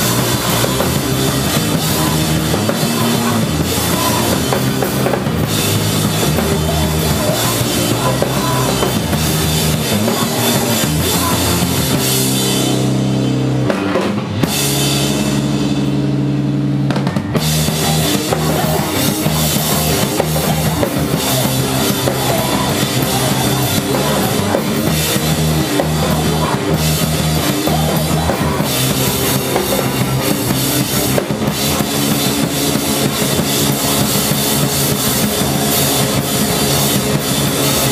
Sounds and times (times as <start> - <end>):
Music: 0.0 - 37.9.